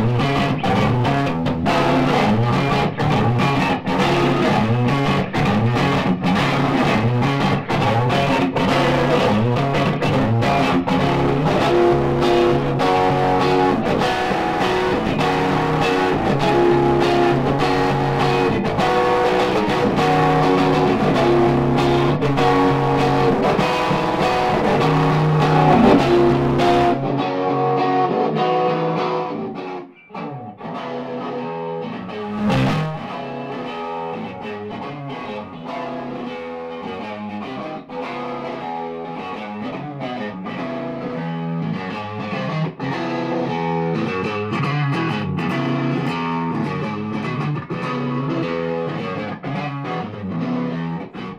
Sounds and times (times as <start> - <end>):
Strum: 0.0 - 28.2, 32.1 - 36.0
Acoustic guitar: 7.0 - 28.2.